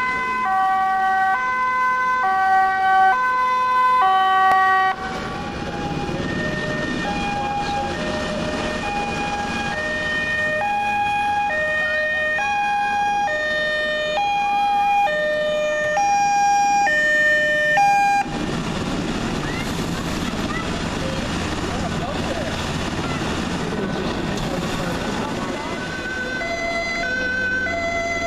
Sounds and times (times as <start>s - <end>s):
Ambulance (siren): 0.0s - 18.5s, 25.2s - 28.2s.